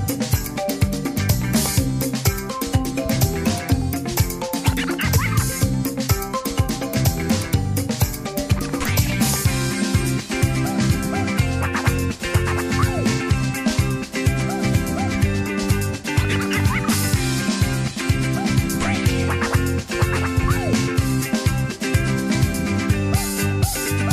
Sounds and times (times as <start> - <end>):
Exciting music: 0.0 - 24.1.